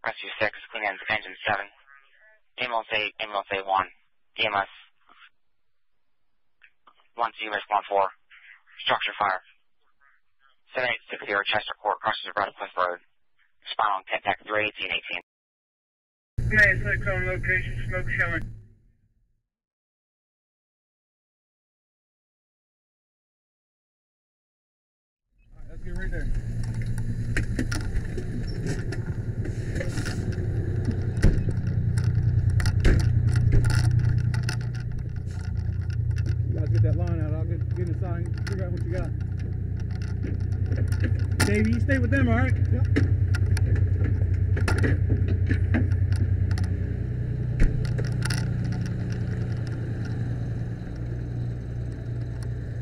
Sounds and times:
Speech: 0.0 - 5.3, 7.2 - 9.5, 10.7 - 13.0, 13.6 - 15.2, 16.5 - 18.5, 25.6 - 26.3, 36.5 - 39.1, 41.4 - 42.9.

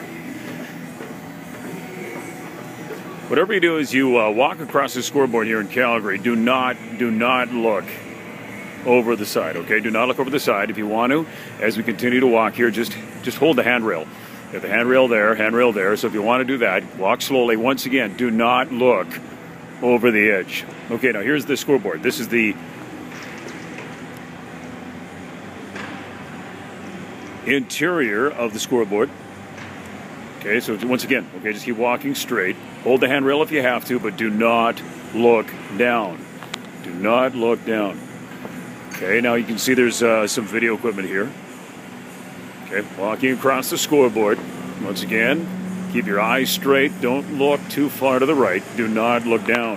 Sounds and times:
Speech: 3.3 - 8.0, 8.8 - 19.2, 19.8 - 22.6, 27.4 - 29.1, 30.4 - 36.2, 36.8 - 38.0, 39.0 - 41.4, 42.6 - 49.7.

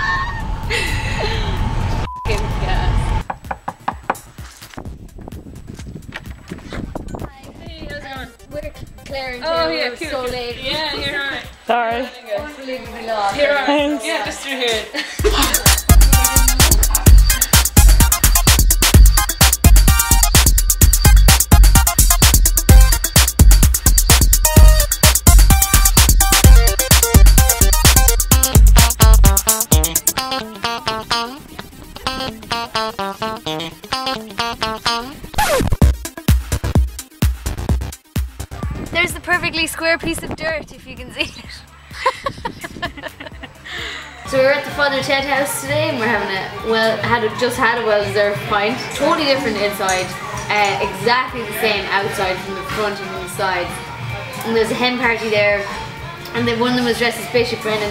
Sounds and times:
Sampler: 15.5 - 36.8.

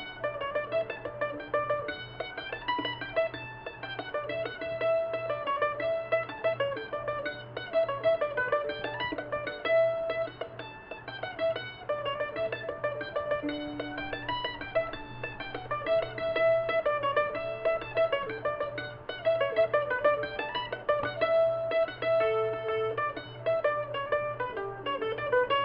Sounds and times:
Music: 0.0 - 25.6.

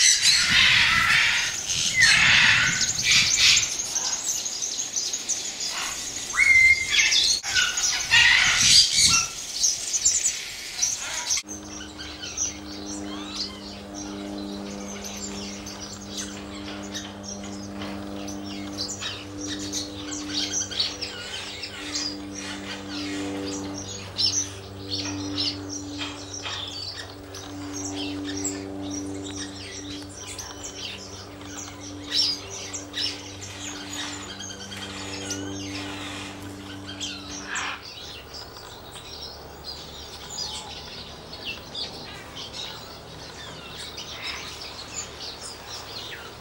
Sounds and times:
Chirp, tweet: 0.0 - 46.4.

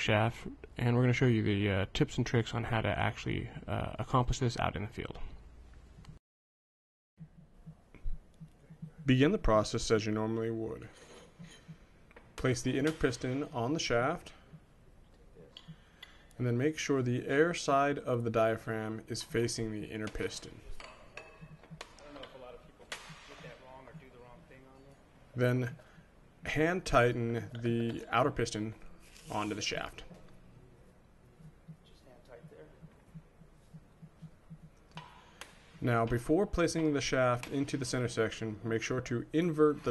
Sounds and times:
Speech: 0.0 - 5.4, 9.0 - 10.9, 12.4 - 14.4, 16.4 - 20.8, 22.0 - 25.8, 26.5 - 30.2, 31.9 - 32.8, 35.8 - 39.9.

